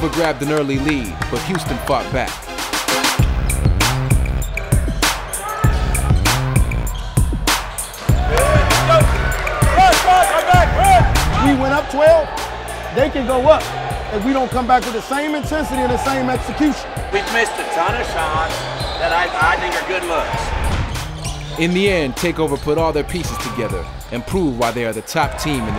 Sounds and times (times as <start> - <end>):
Speech: 0.0 - 2.4, 13.0 - 20.4, 21.6 - 25.7
Music: 0.0 - 25.7.